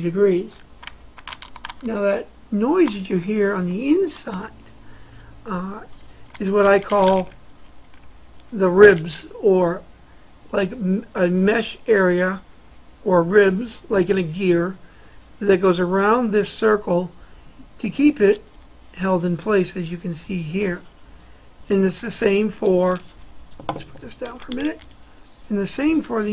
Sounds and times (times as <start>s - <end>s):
Speech: 0.0s - 0.6s, 1.8s - 4.6s, 5.4s - 7.3s, 8.5s - 9.9s, 10.5s - 12.4s, 13.0s - 14.8s, 15.4s - 17.2s, 17.8s - 18.4s, 19.0s - 20.9s, 21.7s - 23.1s, 23.7s - 24.8s, 25.5s - 26.3s
Inside, small room: 0.0s - 26.3s.